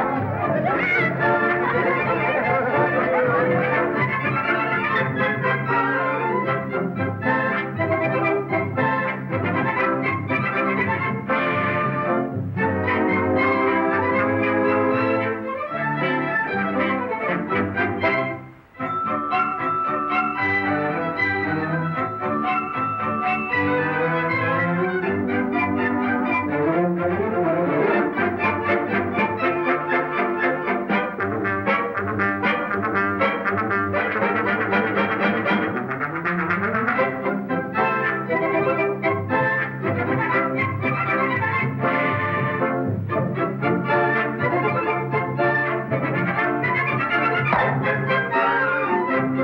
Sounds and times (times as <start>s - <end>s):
Musical instrument: 0.0s - 16.5s, 18.0s - 38.8s, 39.4s - 49.4s.